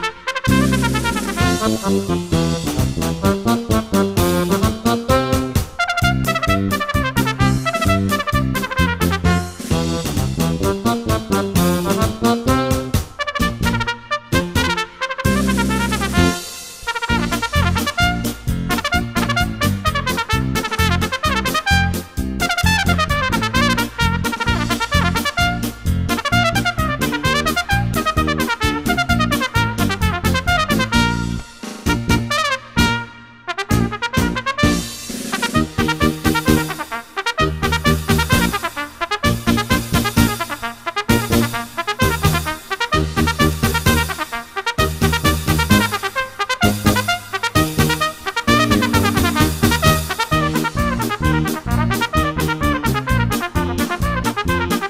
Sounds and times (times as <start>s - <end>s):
Trumpet: 0.0s - 54.8s.